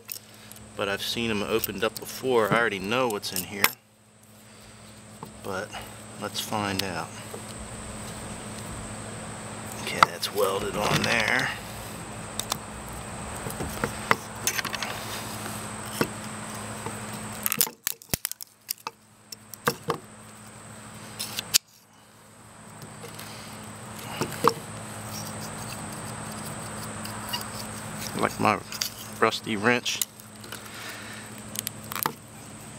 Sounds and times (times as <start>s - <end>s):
Speech: 0.8s - 3.8s, 5.4s - 7.2s, 9.8s - 11.6s, 28.2s - 30.0s.